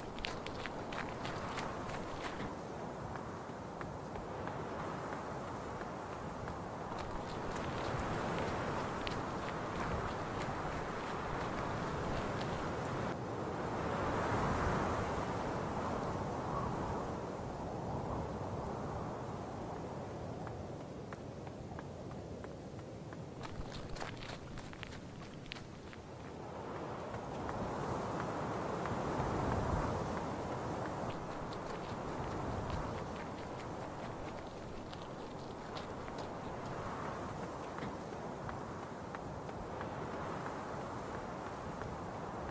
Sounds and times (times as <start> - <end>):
Run: 0.0 - 13.2, 19.8 - 42.5
Outside, rural or natural: 0.0 - 42.5.